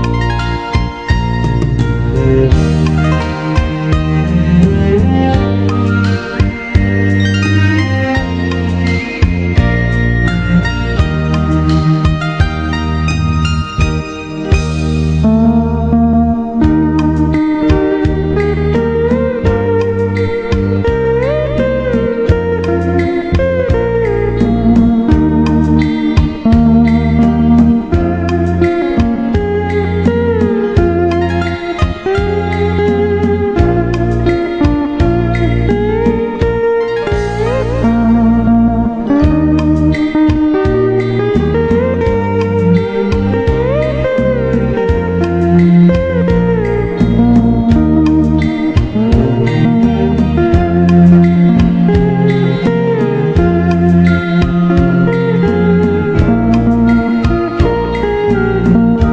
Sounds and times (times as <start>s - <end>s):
Acoustic guitar: 0.0s - 59.1s
Bass guitar: 0.0s - 59.1s
Strum: 0.0s - 59.1s.